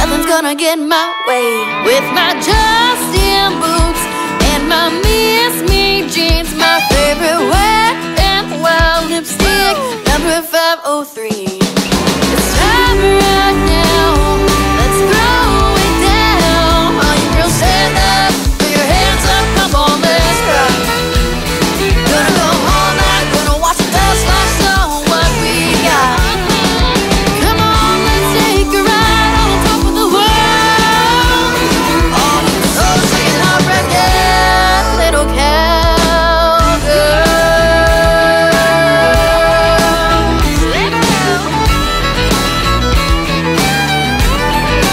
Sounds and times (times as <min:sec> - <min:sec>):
Country: 0:00.0 - 0:10.7, 0:11.8 - 0:44.9.